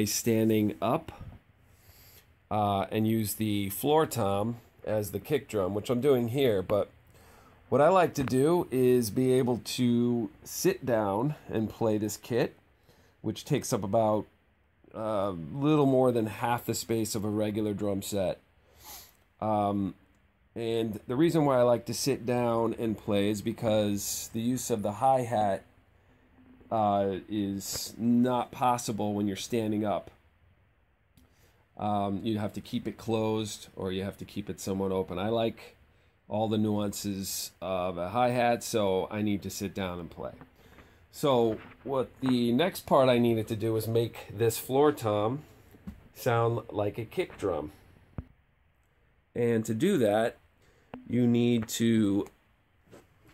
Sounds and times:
Speech: 0.0s - 1.4s, 2.5s - 6.9s, 7.7s - 12.6s, 13.2s - 18.4s, 19.4s - 20.0s, 20.6s - 25.7s, 26.7s - 30.2s, 31.8s - 40.5s, 41.1s - 45.5s, 46.1s - 47.8s, 49.3s - 50.4s, 51.0s - 52.4s.

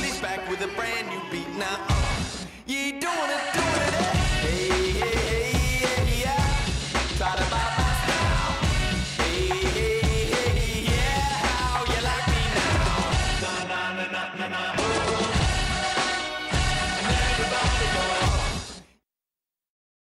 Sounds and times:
Music: 0.0s - 19.0s.

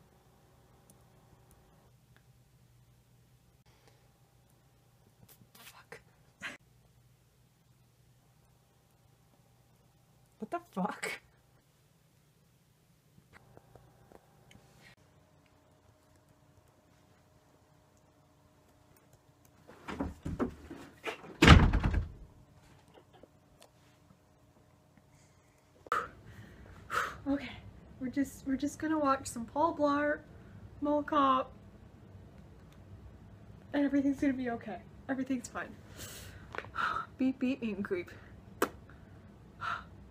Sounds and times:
Speech: 10.4s - 11.3s, 27.3s - 31.5s, 33.7s - 35.8s, 37.2s - 38.3s.

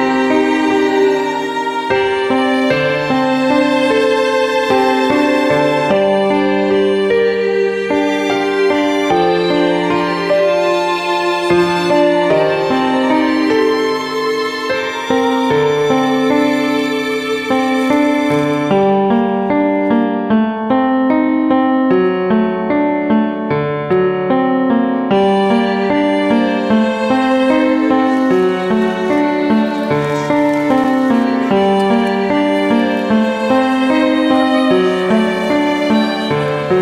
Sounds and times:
Music: 0.0s - 36.8s.

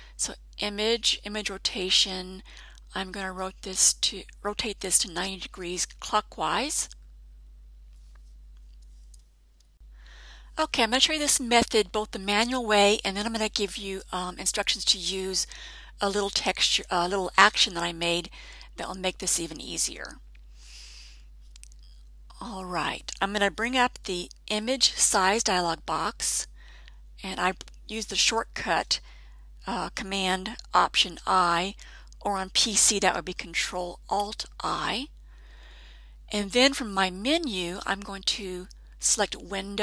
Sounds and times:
Speech: 0.2s - 7.0s, 10.6s - 20.2s, 22.3s - 26.5s, 27.2s - 29.0s, 29.7s - 35.1s, 36.3s - 39.8s.

